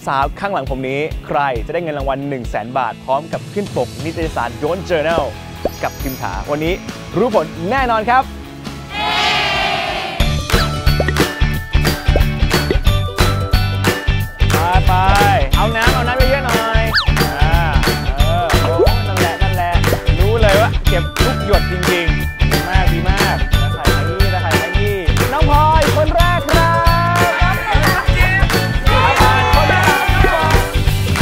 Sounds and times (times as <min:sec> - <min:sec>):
Music: 0:00.0 - 0:31.2.